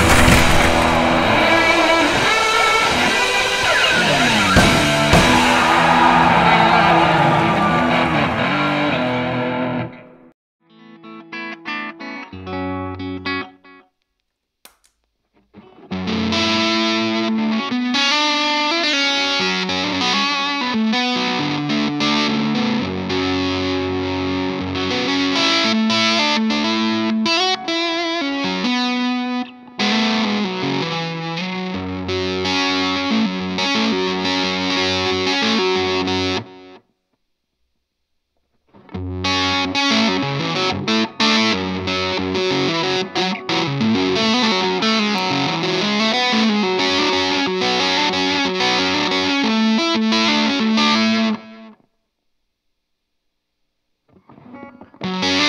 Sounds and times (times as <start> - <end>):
Electric guitar: 0.0 - 13.9, 15.5 - 36.8, 38.7 - 51.9, 54.1 - 55.4.